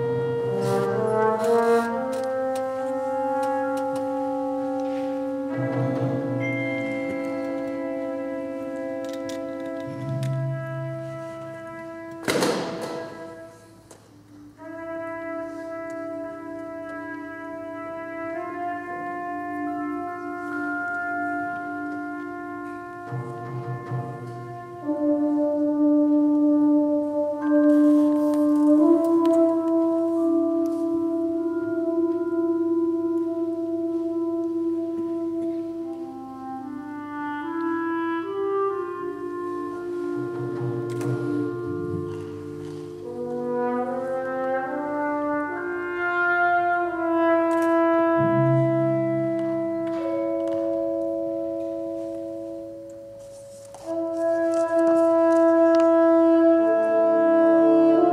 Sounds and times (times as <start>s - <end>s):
Classical music: 0.0s - 58.1s
Inside, large room or hall: 0.0s - 58.1s
Orchestra: 0.0s - 58.1s.